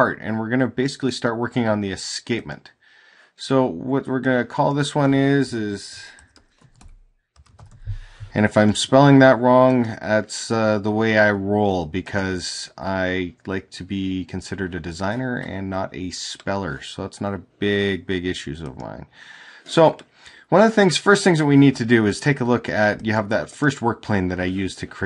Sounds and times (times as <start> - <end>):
Speech: 0.0 - 2.8, 3.4 - 6.2, 8.3 - 19.1, 19.7 - 25.0.